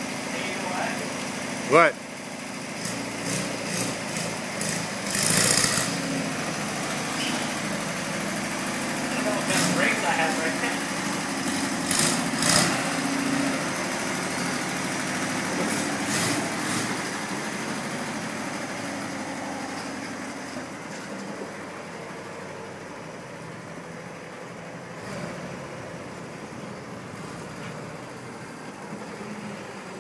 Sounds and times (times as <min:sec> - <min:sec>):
Truck: 0:00.0 - 0:30.0
Speech: 0:00.3 - 0:01.1, 0:01.7 - 0:02.0, 0:09.1 - 0:10.8
Lawn mower: 0:02.2 - 0:21.2.